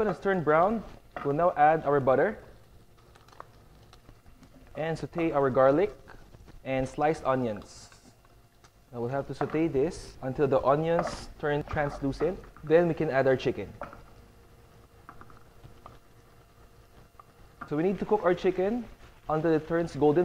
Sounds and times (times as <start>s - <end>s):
Speech: 0.0s - 2.5s, 4.8s - 6.0s, 6.7s - 7.9s, 9.0s - 13.8s, 17.7s - 20.2s.